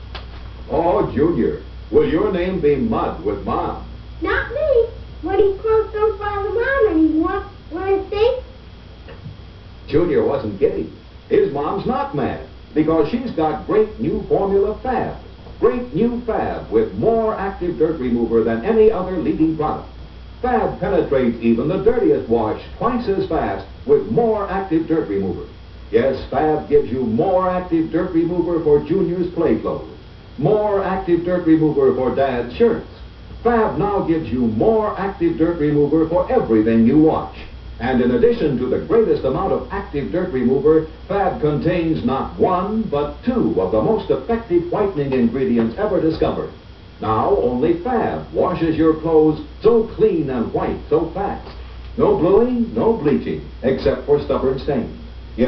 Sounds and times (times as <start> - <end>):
Speech: 0.7 - 8.5, 9.9 - 55.4.